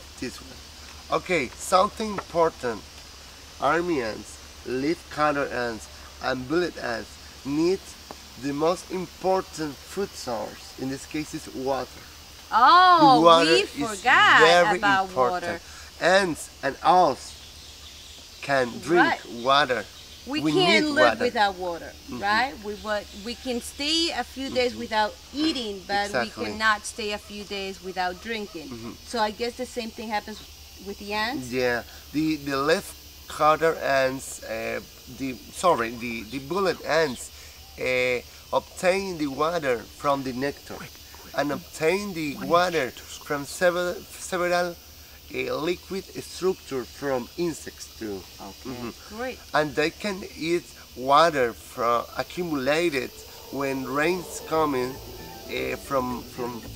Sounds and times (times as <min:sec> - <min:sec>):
Cricket: 0:00.0 - 0:56.7.